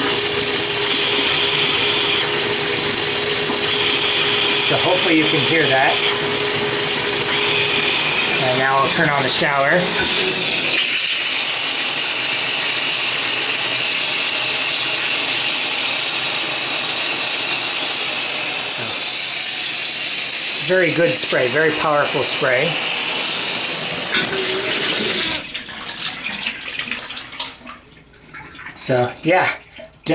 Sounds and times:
Water tap, faucet: 0.0s - 30.1s
Speech: 4.7s - 6.1s, 8.4s - 10.0s, 20.6s - 22.8s, 28.8s - 30.1s.

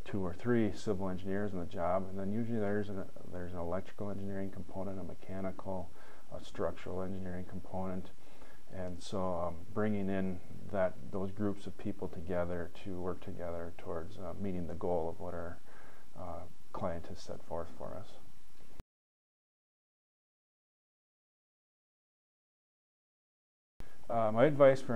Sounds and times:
Speech: 0.0s - 15.6s, 16.2s - 18.3s, 24.1s - 24.9s.

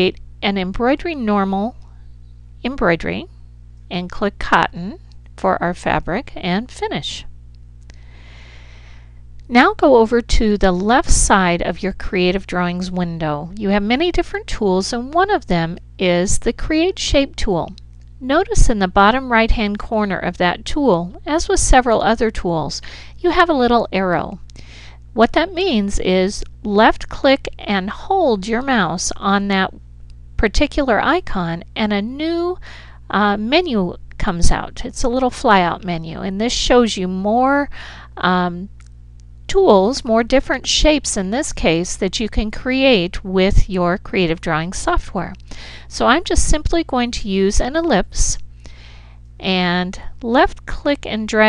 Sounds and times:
Speech: 0.0s - 1.9s, 2.6s - 3.3s, 3.9s - 7.3s, 9.5s - 24.4s, 25.2s - 29.8s, 30.4s - 38.8s, 39.5s - 48.4s, 49.4s - 51.4s.

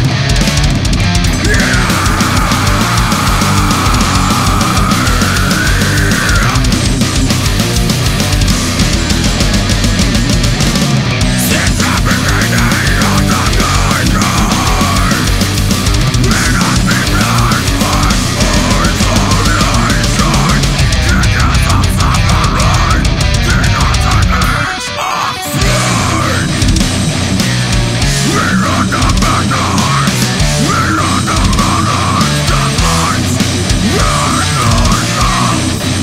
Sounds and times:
Music: 0.0s - 36.0s.

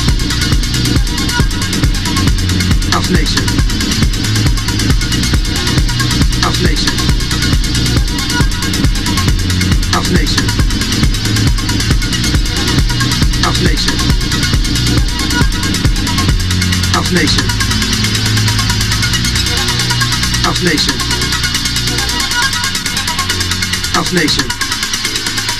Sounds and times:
Music: 0.0s - 25.5s
Speech: 2.9s - 3.6s, 6.4s - 7.0s, 10.0s - 10.5s, 13.4s - 14.0s, 17.0s - 17.6s, 20.5s - 21.2s, 24.0s - 24.6s.

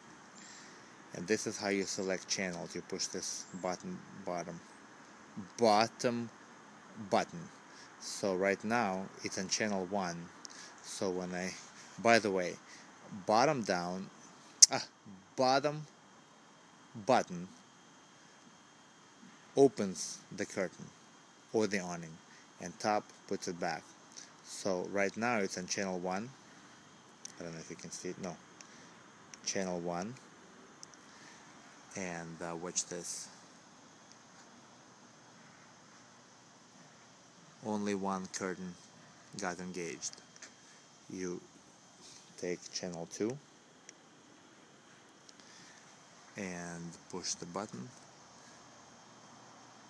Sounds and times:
Speech: 1.1s - 4.6s, 5.4s - 6.3s, 7.0s - 15.9s, 17.0s - 17.5s, 19.6s - 20.9s, 21.5s - 23.8s, 24.4s - 26.4s, 27.3s - 28.4s, 29.5s - 30.2s, 32.0s - 33.4s, 37.6s - 38.8s, 39.4s - 40.2s, 41.1s - 41.5s, 42.4s - 43.4s, 46.4s - 48.0s.

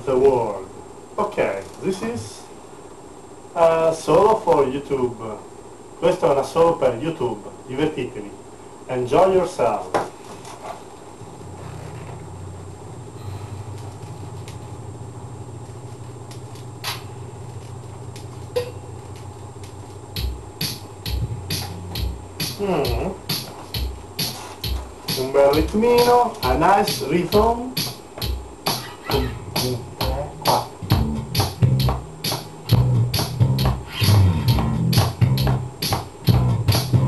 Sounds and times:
Speech: 0.0s - 2.5s, 3.6s - 10.0s, 22.6s - 23.2s, 25.2s - 27.8s, 29.1s - 30.7s.

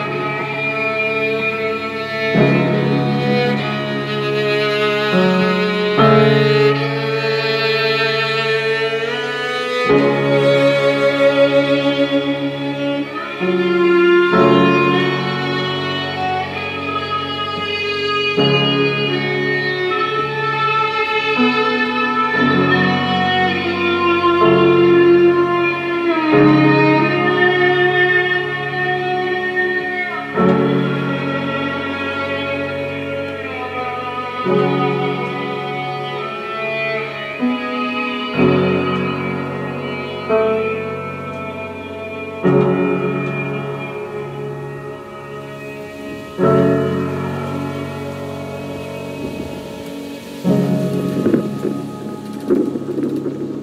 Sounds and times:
String section: 0.0s - 53.6s.

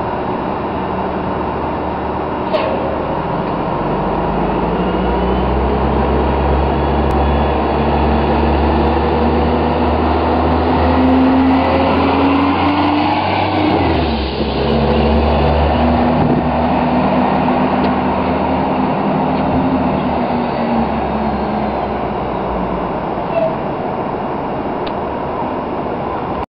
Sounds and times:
Bus: 0.0s - 26.5s.

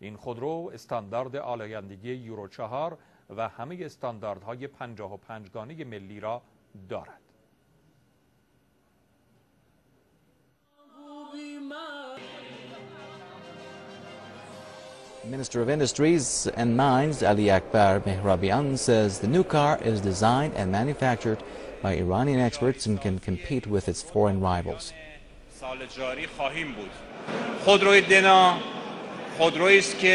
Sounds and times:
Speech: 0.0s - 7.3s, 15.3s - 27.0s, 27.6s - 28.6s, 29.4s - 30.1s
Music: 10.8s - 16.3s.

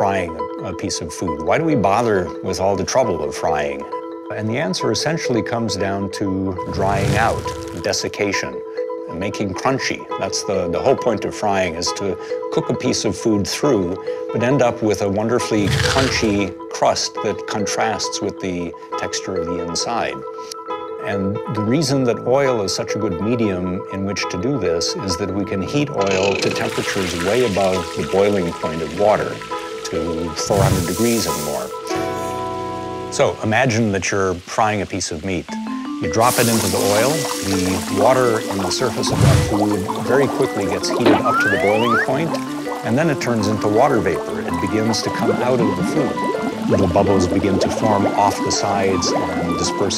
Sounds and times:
Water: 6.6s - 8.1s, 15.4s - 16.6s, 26.0s - 49.9s.

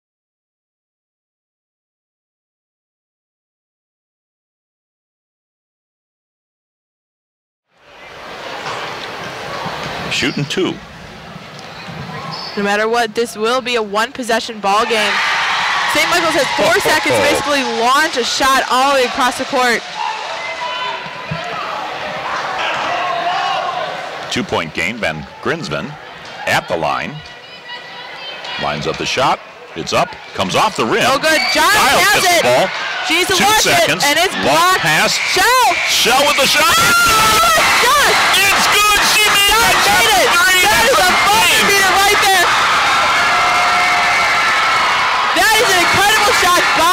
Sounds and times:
Inside, large room or hall: 7.8s - 46.9s
Speech: 16.0s - 19.8s.

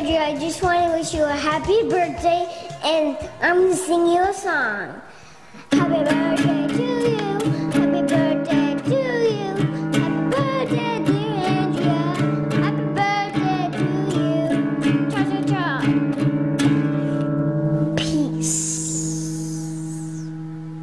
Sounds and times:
Child speech, kid speaking: 0.0s - 5.1s, 15.2s - 15.9s, 18.0s - 19.9s
Music: 0.0s - 20.8s.

